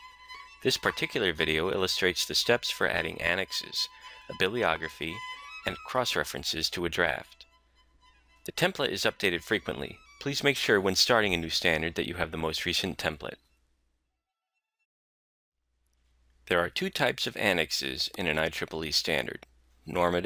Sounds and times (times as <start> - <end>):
Music: 0.0 - 10.8
Speech: 0.7 - 7.4, 8.5 - 13.4, 16.5 - 20.2.